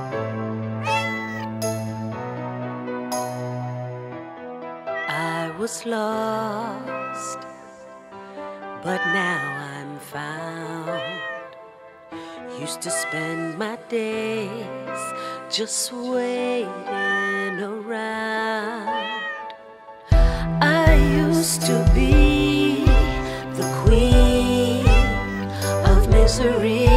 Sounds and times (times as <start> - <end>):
Music: 0.0 - 26.9
Meow: 0.8 - 1.6, 4.9 - 5.6, 6.8 - 7.5, 8.8 - 10.0, 10.8 - 11.6, 12.8 - 13.7, 14.9 - 15.3, 16.8 - 17.8, 18.8 - 19.6, 22.6 - 23.3, 24.2 - 26.2.